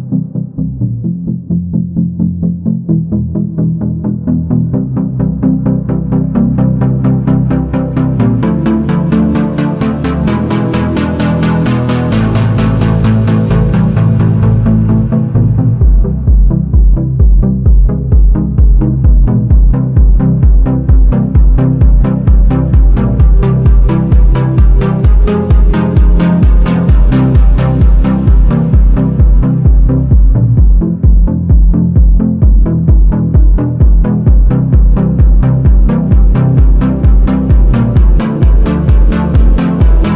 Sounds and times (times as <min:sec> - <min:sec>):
Music: 0:00.0 - 0:40.1.